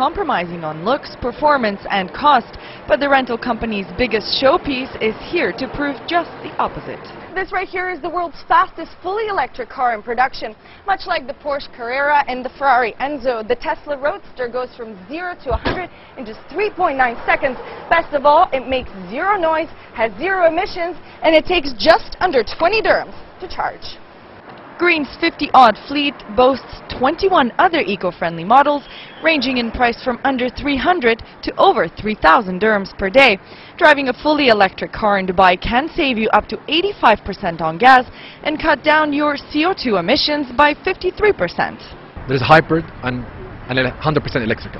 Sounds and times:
Speech: 0:00.0 - 0:24.0, 0:24.8 - 0:44.7.

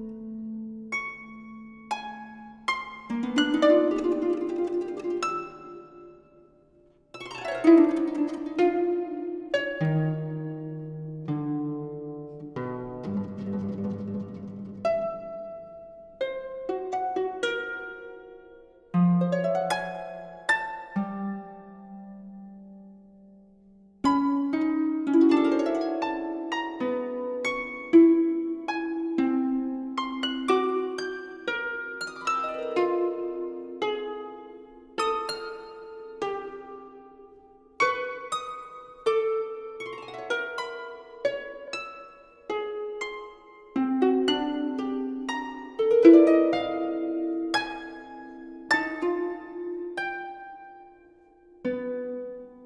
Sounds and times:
Harp: 0:00.0 - 0:52.6.

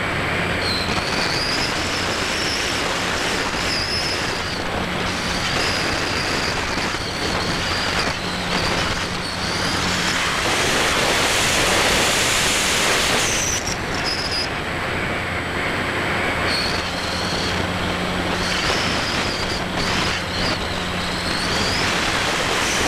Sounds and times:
Aircraft: 0:00.0 - 0:22.8
Outside, rural or natural: 0:00.0 - 0:22.8.

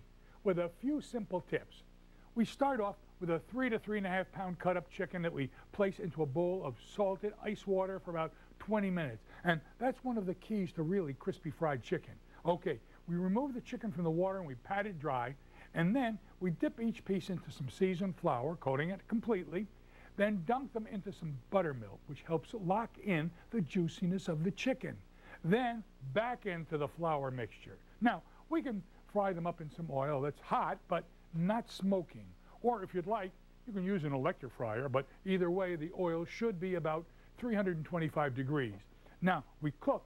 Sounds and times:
Speech: 0:00.4 - 0:40.0.

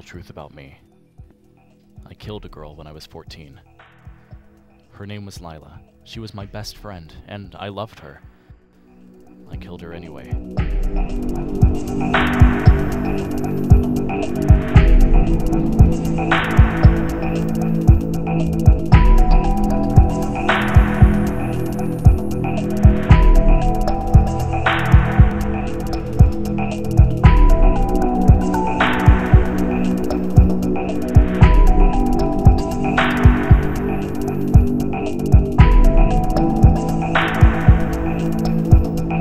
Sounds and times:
Music: 0:00.0 - 0:39.2.

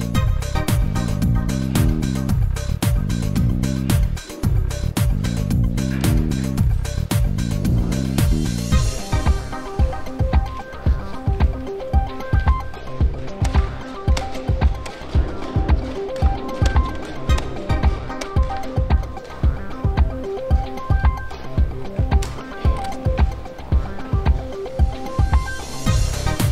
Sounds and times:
Music: 0:00.0 - 0:26.5.

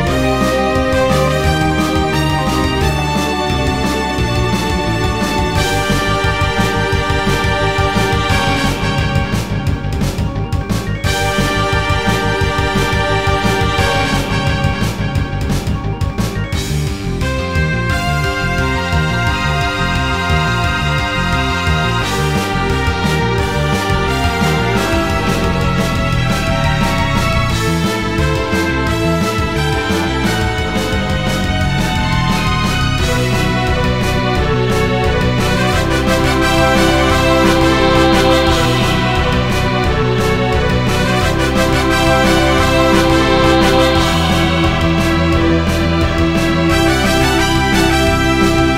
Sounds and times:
Music: 0:00.0 - 0:48.7.

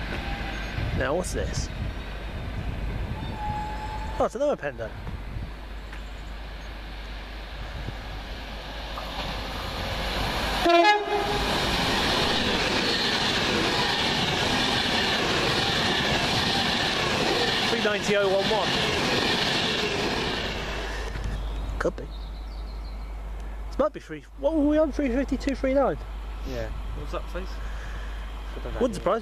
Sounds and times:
Railroad car, train wagon: 0:00.0 - 0:29.2
Train horn: 0:03.2 - 0:04.2, 0:10.6 - 0:11.6.

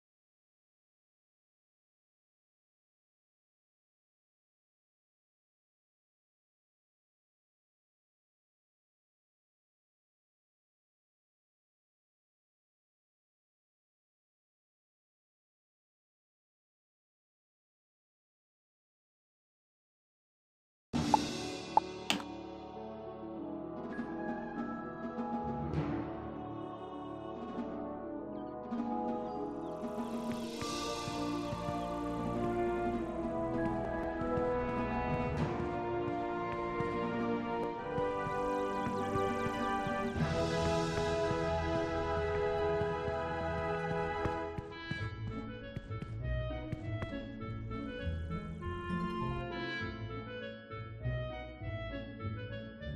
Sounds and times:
Music: 0:21.0 - 0:52.9
Walk, footsteps: 0:30.3 - 0:40.1, 0:41.0 - 0:47.7.

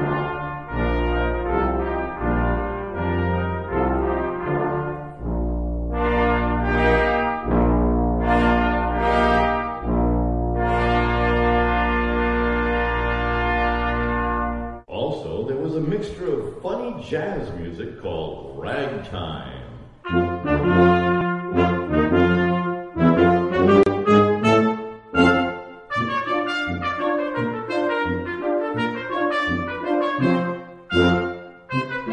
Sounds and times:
Trumpet: 0:00.0 - 0:14.9, 0:18.7 - 0:32.1
Speech: 0:14.9 - 0:19.9.

